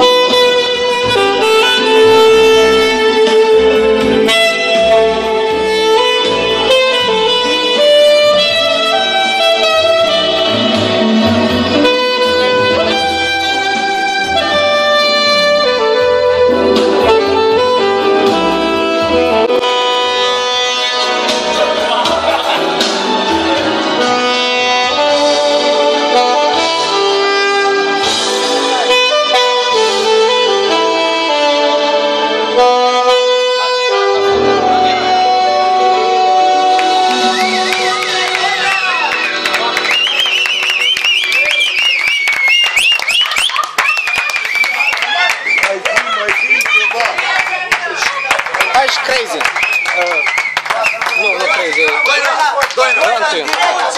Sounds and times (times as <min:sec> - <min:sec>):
Music: 0:00.0 - 0:53.9.